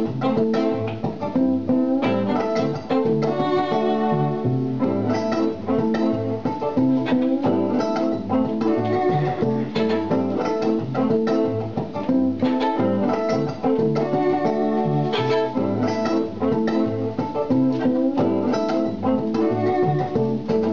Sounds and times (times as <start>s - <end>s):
Violin, fiddle: 2.0s - 6.2s, 6.9s - 10.6s, 12.4s - 16.8s, 18.1s - 20.7s.